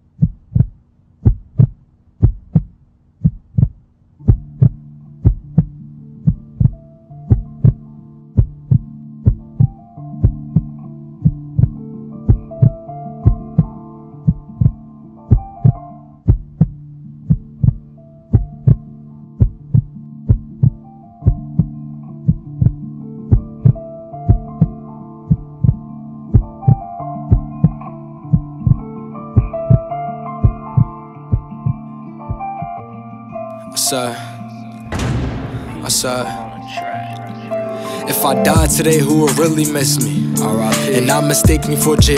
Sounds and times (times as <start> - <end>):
Background music: 4.2 - 42.1
Sad music: 4.3 - 42.1.